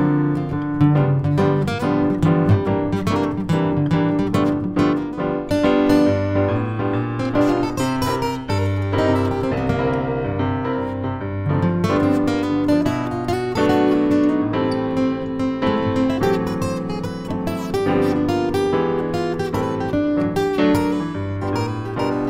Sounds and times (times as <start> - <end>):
Blues: 0.0 - 22.3.